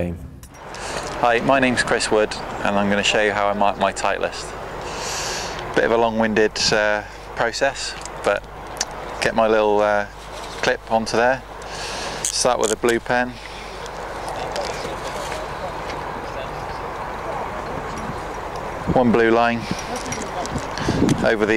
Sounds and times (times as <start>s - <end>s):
Speech: 1.2s - 4.5s, 5.8s - 8.4s, 9.2s - 11.4s, 12.3s - 13.4s, 18.9s - 20.6s, 21.2s - 21.5s.